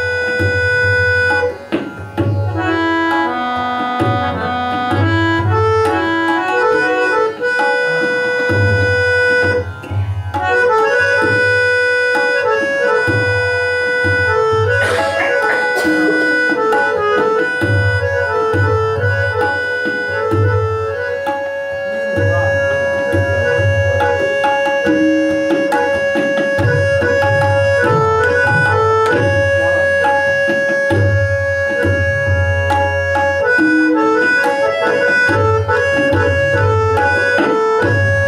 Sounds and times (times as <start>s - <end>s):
Tabla: 0.0s - 38.2s.